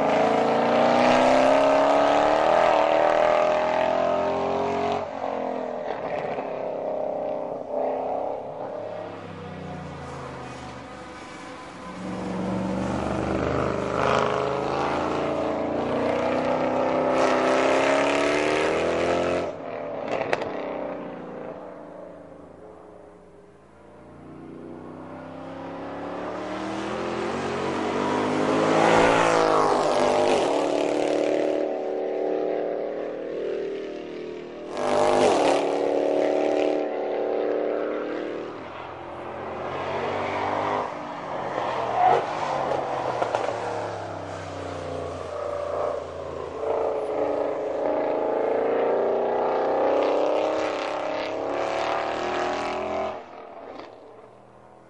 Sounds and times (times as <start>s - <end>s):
Car: 0.0s - 54.8s.